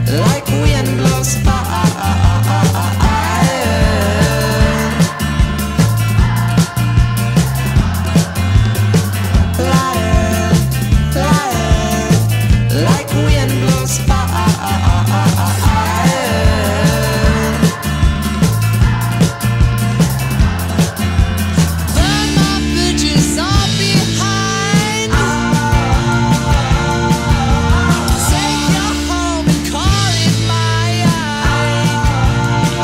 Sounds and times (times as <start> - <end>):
Music: 0.0 - 32.8.